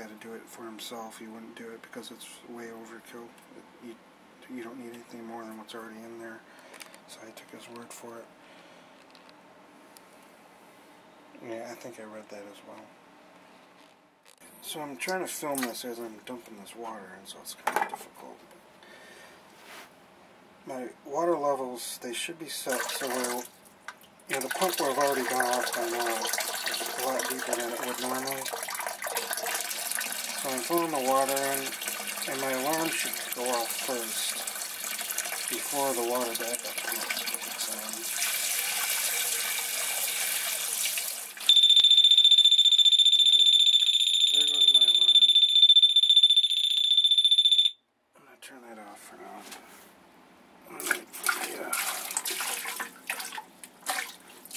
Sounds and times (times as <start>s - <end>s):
Water: 22.6s - 41.6s, 50.7s - 54.5s.